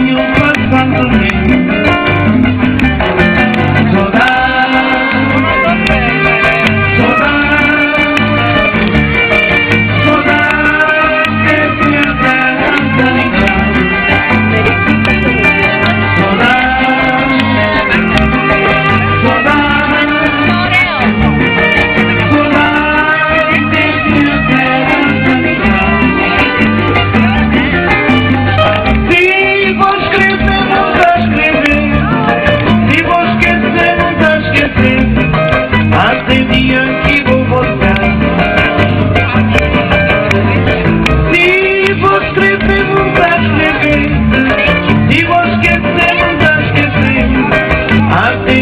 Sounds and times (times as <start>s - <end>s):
Music: 0.0s - 48.6s.